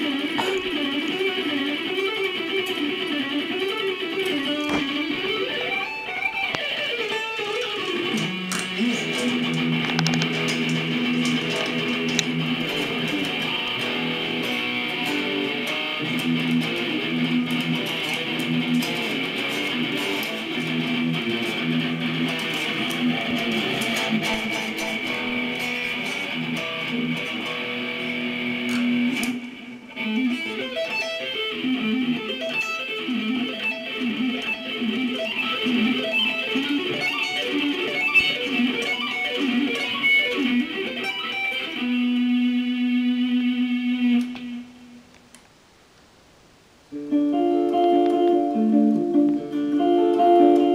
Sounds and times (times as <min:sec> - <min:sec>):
Guitar: 0:00.0 - 0:45.6, 0:46.6 - 0:50.7.